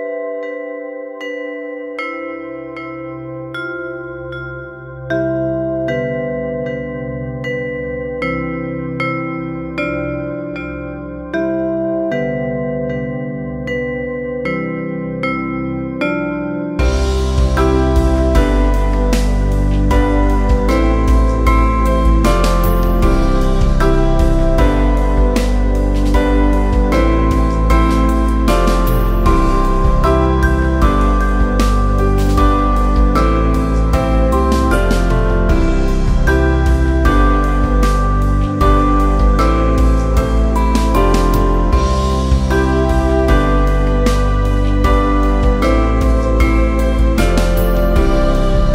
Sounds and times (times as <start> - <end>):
Music: 0.0 - 48.7.